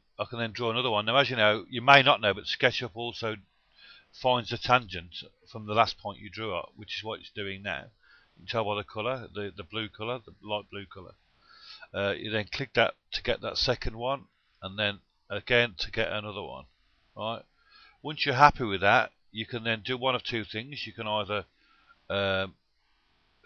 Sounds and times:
Speech: 0.2 - 3.4, 4.2 - 7.9, 8.5 - 11.2, 11.8 - 17.4, 18.1 - 21.5, 22.1 - 22.6.

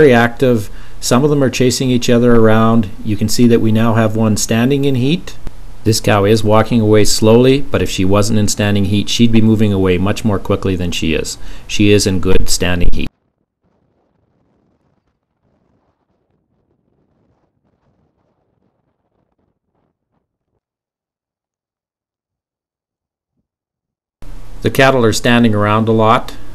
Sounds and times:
Speech: 0.0 - 13.1, 24.6 - 26.4.

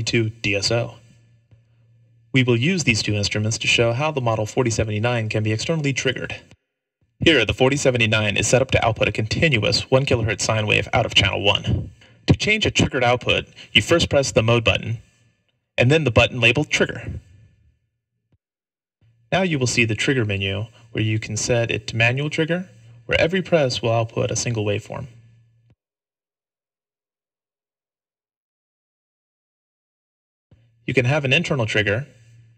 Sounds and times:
Narration, monologue: 0.0 - 17.7, 19.0 - 25.5, 30.6 - 32.5.

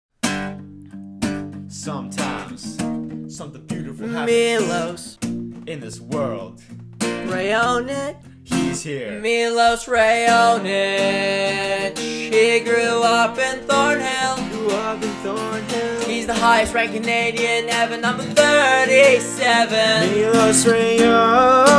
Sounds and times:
Music: 0.2 - 21.7.

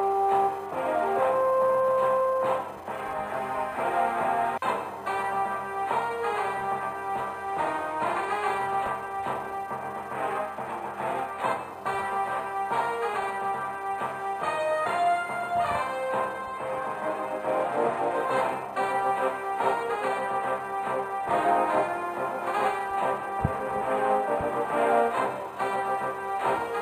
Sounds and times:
Soundtrack music: 0.0 - 26.8.

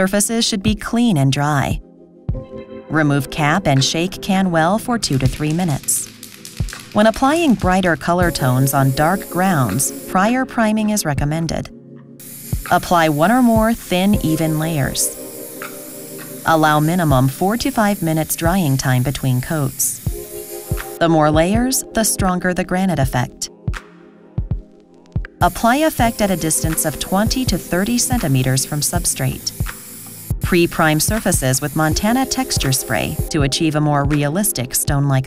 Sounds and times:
Speech: 0.0 - 1.8, 2.9 - 6.1, 7.0 - 11.7, 12.7 - 15.1, 16.5 - 20.0, 21.0 - 23.5, 25.4 - 29.6, 30.4 - 35.2
Music: 0.0 - 35.2
Spray: 5.0 - 10.3, 12.2 - 21.0, 25.4 - 33.3.

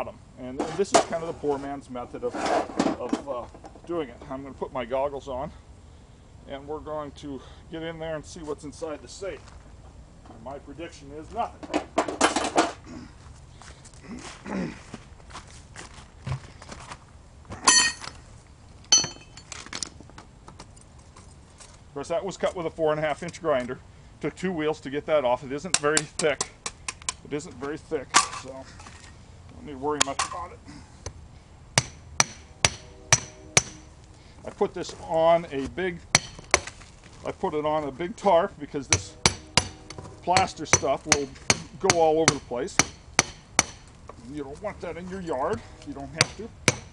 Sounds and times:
Speech: 0.0 - 5.6, 6.4 - 9.5, 10.4 - 11.6, 22.0 - 26.6, 27.2 - 28.7, 29.6 - 30.6, 34.4 - 36.0, 37.2 - 39.2, 40.2 - 42.8, 44.2 - 46.6.

